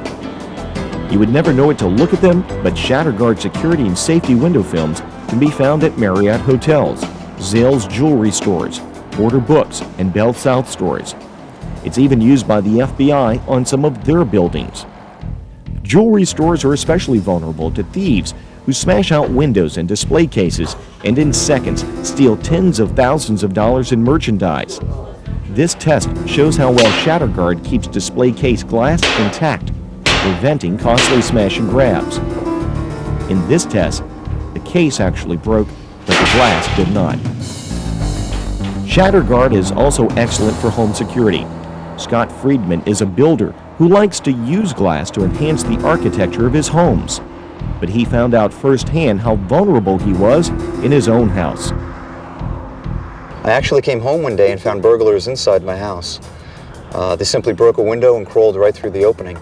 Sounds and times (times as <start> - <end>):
Music: 0.0 - 59.4
Speech: 1.1 - 11.2, 11.9 - 14.9, 15.9 - 32.2, 33.3 - 34.0, 34.6 - 37.3, 38.9 - 47.2, 47.8 - 51.8, 53.5 - 56.3, 56.9 - 59.4.